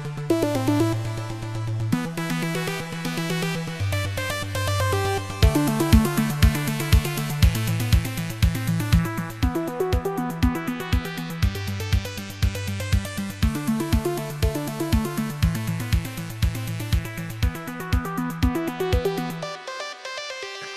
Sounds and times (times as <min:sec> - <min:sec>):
Music: 0:00.0 - 0:20.7.